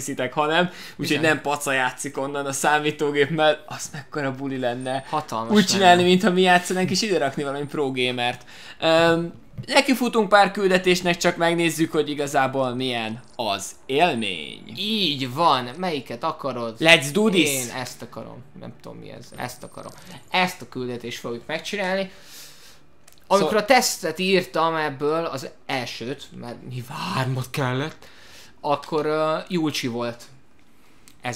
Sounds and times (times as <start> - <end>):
Speech: 0.0 - 22.1, 28.6 - 30.4.